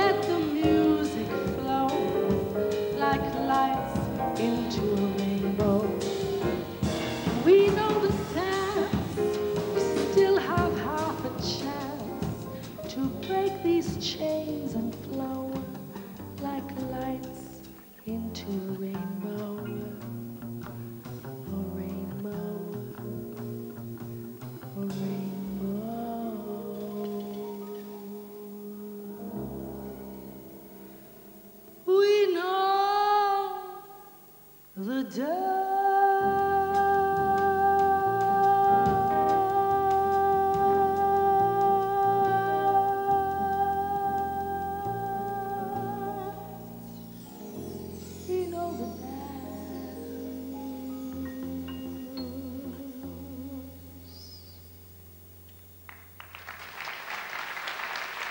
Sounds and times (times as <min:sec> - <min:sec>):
Singing: 0:00.0 - 0:20.0, 0:24.6 - 0:30.6, 0:34.8 - 0:54.1
Music: 0:00.0 - 0:58.3.